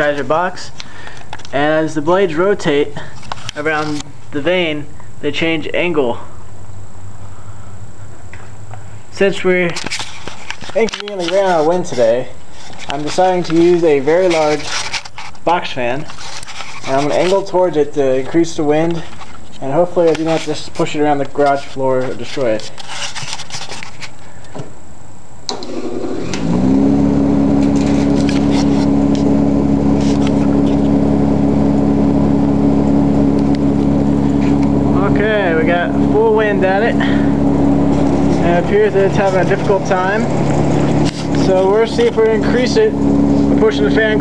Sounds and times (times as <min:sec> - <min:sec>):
Speech: 0:00.0 - 0:00.8, 0:01.5 - 0:06.3, 0:09.1 - 0:09.8, 0:10.7 - 0:14.7, 0:15.4 - 0:16.1, 0:16.9 - 0:22.7, 0:34.9 - 0:37.2, 0:38.4 - 0:40.3, 0:41.4 - 0:43.0, 0:43.6 - 0:44.2.